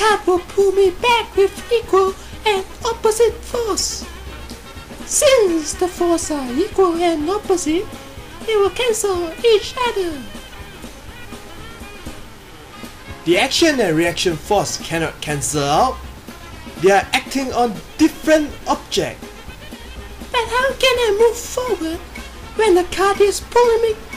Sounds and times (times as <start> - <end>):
Speech: 0.0 - 4.1, 5.0 - 10.4, 13.2 - 16.0, 16.8 - 19.2, 20.3 - 24.1
Music: 0.0 - 24.1.